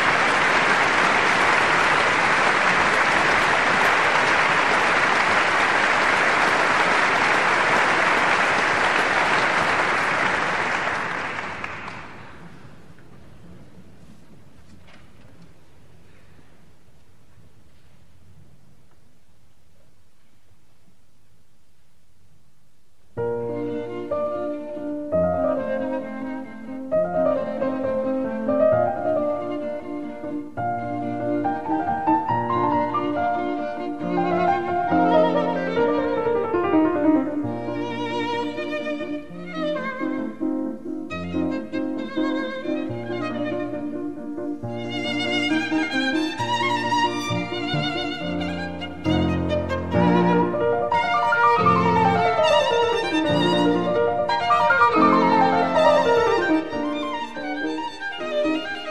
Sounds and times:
Classical music: 0:00.0 - 0:18.6, 0:23.2 - 0:58.9
Piano: 0:00.0 - 0:58.9
Cello: 0:23.2 - 0:58.9
Violin, fiddle: 0:23.2 - 0:58.9.

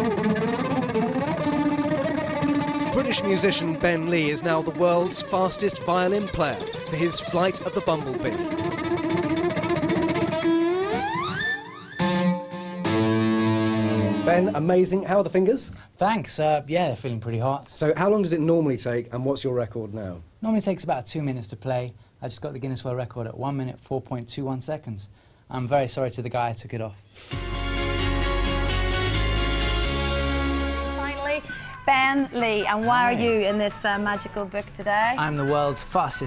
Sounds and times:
Musical instrument: 0:00.0 - 0:14.7, 0:27.3 - 0:36.2
Speech: 0:03.0 - 0:08.4, 0:14.2 - 0:27.0, 0:31.1 - 0:36.2.

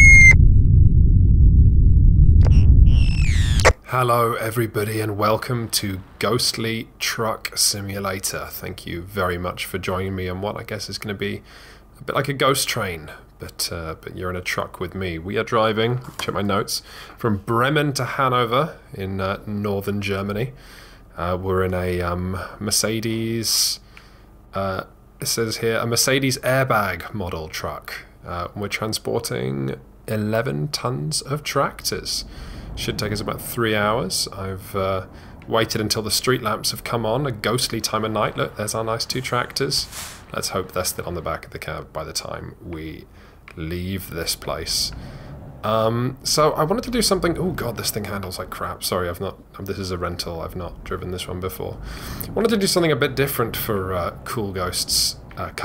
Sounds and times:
Speech: 0:03.8 - 0:23.8, 0:24.6 - 0:45.0, 0:45.6 - 0:55.6.

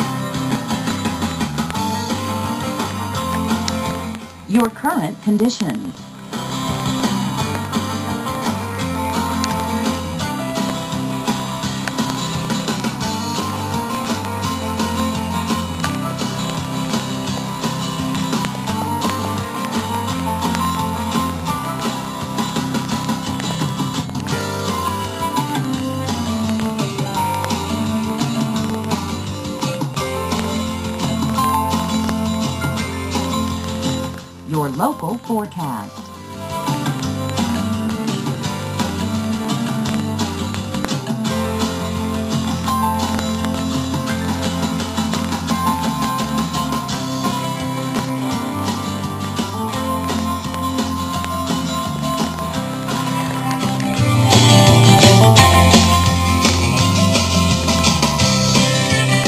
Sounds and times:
Rhythm and blues: 0:00.0 - 0:59.2.

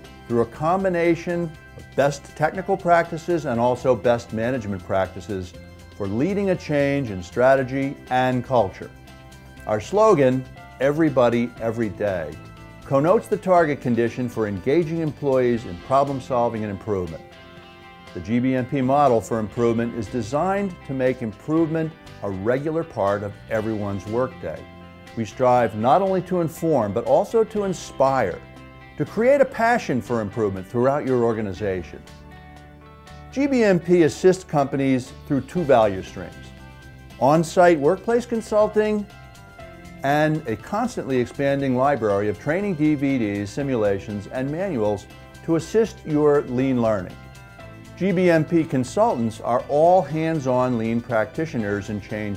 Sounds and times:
Music: 0:00.0 - 0:52.3
Speech: 0:00.3 - 0:08.9, 0:09.7 - 0:17.2, 0:18.2 - 0:24.6, 0:25.2 - 0:28.4, 0:29.0 - 0:32.0, 0:33.3 - 0:36.4, 0:37.2 - 0:39.1, 0:40.0 - 0:47.2, 0:48.0 - 0:52.3.

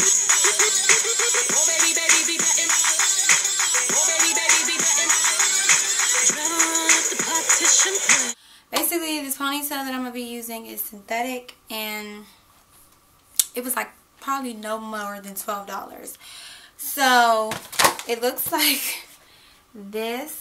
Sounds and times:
Speech: 0:08.7 - 0:12.3, 0:13.5 - 0:16.2, 0:16.8 - 0:19.0, 0:19.8 - 0:20.4.

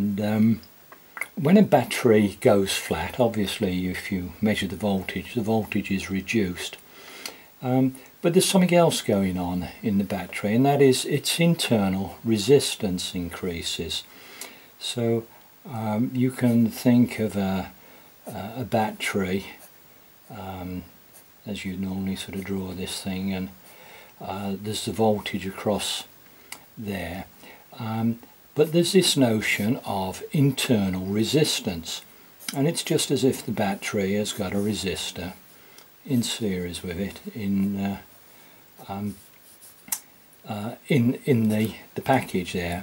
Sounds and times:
Speech: 0:00.0 - 0:06.8, 0:07.6 - 0:14.1, 0:14.8 - 0:19.7, 0:20.3 - 0:23.6, 0:24.2 - 0:26.1, 0:26.8 - 0:35.4, 0:36.0 - 0:38.1, 0:38.8 - 0:39.3, 0:40.4 - 0:42.8.

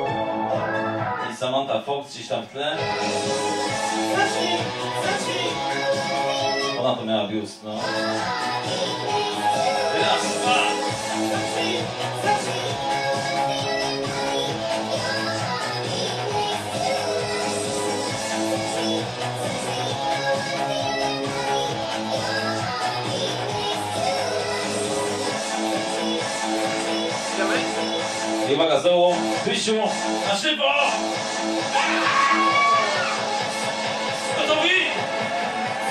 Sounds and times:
Music: 0:00.0 - 0:35.9
Speech: 0:01.3 - 0:02.8, 0:06.8 - 0:07.8, 0:28.5 - 0:31.0, 0:34.4 - 0:35.0.

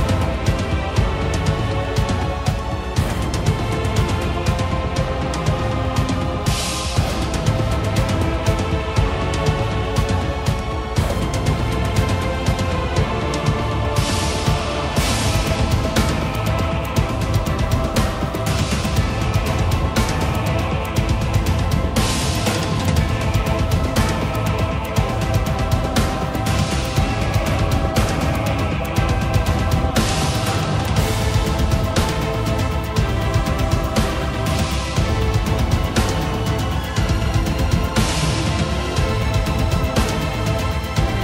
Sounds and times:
Music: 0:00.0 - 0:41.2.

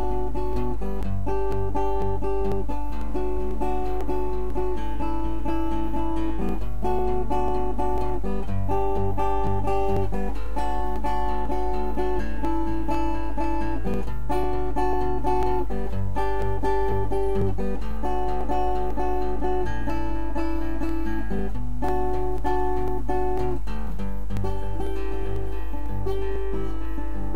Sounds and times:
Acoustic guitar: 0:00.0 - 0:27.3.

